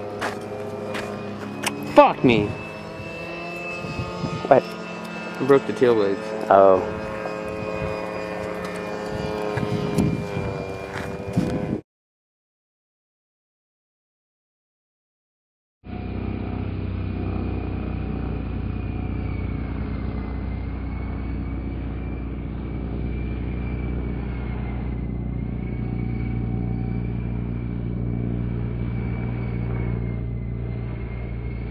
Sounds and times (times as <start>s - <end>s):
Rumble: 15.9s - 31.7s.